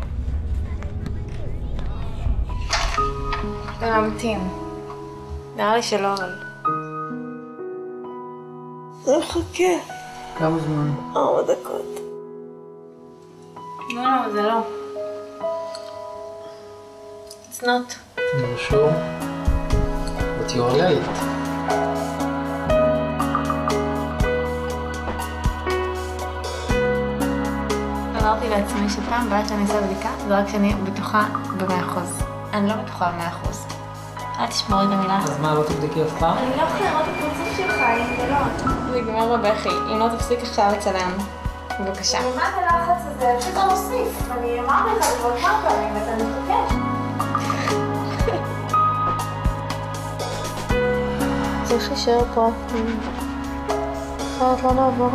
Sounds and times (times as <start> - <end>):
Music: 0.0 - 55.1.